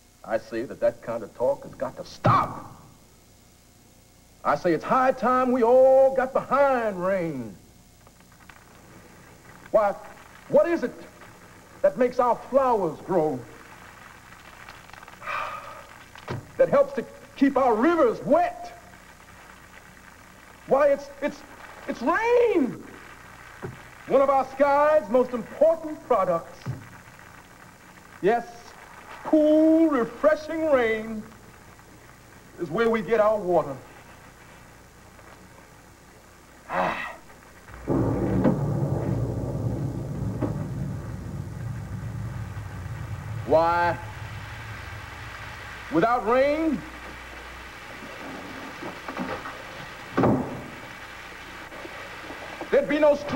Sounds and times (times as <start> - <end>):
Speech: 0.2 - 2.8, 4.4 - 7.6, 9.8 - 11.1, 11.8 - 13.5, 16.6 - 18.8, 20.7 - 22.8, 24.1 - 26.7, 28.2 - 28.7, 29.3 - 31.3, 32.6 - 33.9, 43.5 - 44.0, 45.9 - 46.9, 52.7 - 53.3.